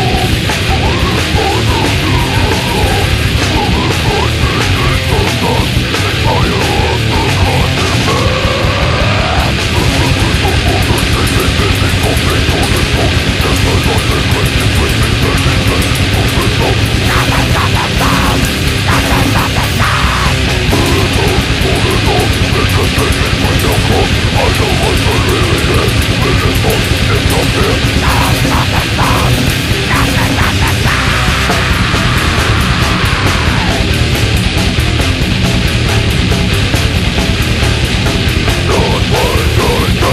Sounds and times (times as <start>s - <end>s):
Music: 0.0s - 40.1s.